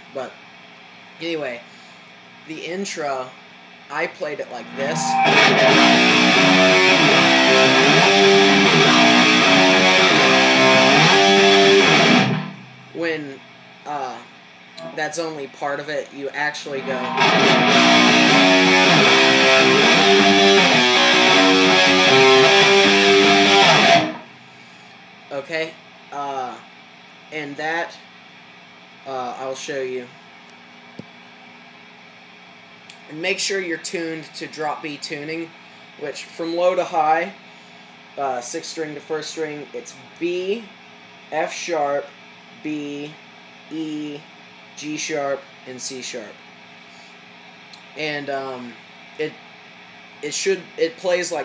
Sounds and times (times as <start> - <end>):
Speech: 0.0 - 0.4, 1.2 - 1.7, 2.5 - 5.2, 13.0 - 17.1, 25.3 - 26.7, 27.3 - 28.1, 29.0 - 30.2, 32.9 - 37.4, 38.2 - 46.4, 47.8 - 49.4, 50.2 - 51.4
Electric guitar: 4.6 - 12.8, 14.8 - 15.1, 16.7 - 24.4
Strum: 4.7 - 12.8, 14.8 - 15.2, 16.7 - 24.3.